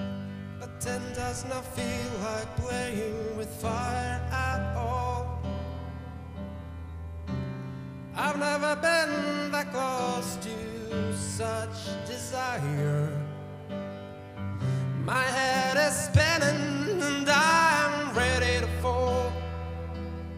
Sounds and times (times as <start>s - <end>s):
Music: 0.0s - 20.3s.